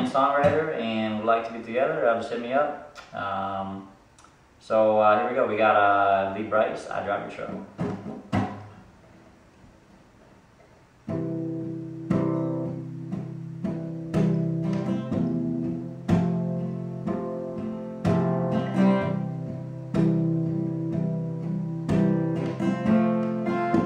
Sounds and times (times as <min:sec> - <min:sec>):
Speech: 0:00.0 - 0:03.9, 0:04.6 - 0:07.7.